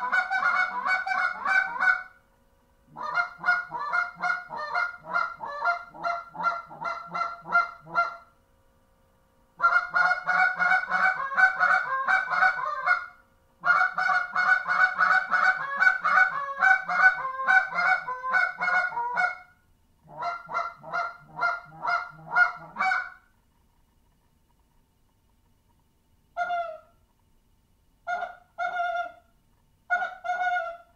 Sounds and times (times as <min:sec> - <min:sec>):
Goose: 0:00.0 - 0:02.2, 0:02.9 - 0:08.3, 0:09.6 - 0:23.2, 0:26.4 - 0:27.0, 0:28.0 - 0:29.3, 0:29.9 - 0:30.9.